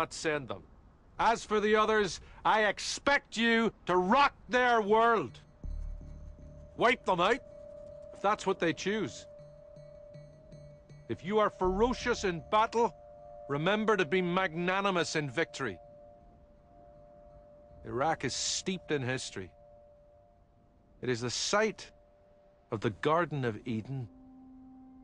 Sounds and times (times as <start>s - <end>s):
Male speech, man speaking: 0.0s - 5.4s, 6.8s - 7.4s, 8.2s - 9.3s, 11.1s - 15.8s, 17.8s - 19.6s, 21.0s - 22.0s, 22.7s - 24.1s
Narration, monologue: 0.0s - 24.9s
Music: 4.7s - 25.0s.